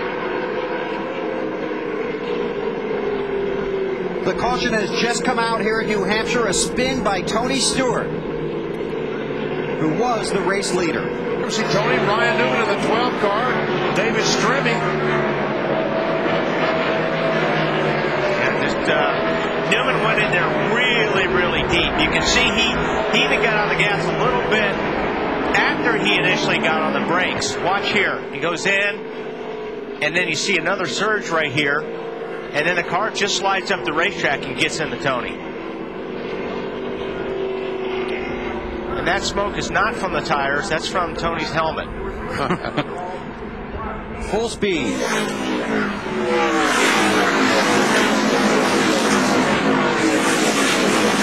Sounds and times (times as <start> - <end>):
Speech: 4.2 - 8.1, 9.8 - 15.0, 18.4 - 24.8, 25.5 - 29.0, 30.0 - 31.9, 32.5 - 35.4, 38.9 - 43.2, 43.8 - 45.0.